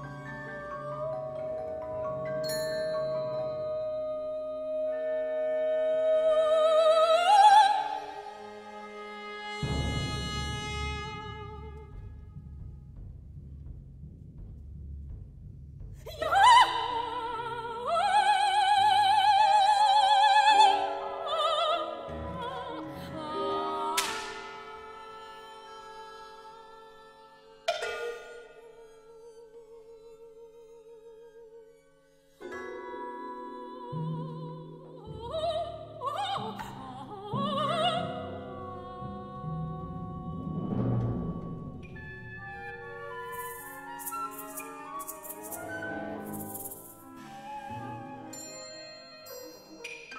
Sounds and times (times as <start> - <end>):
Music: 0.0 - 50.1
Female singing: 3.2 - 8.2, 16.1 - 27.7, 32.8 - 40.6.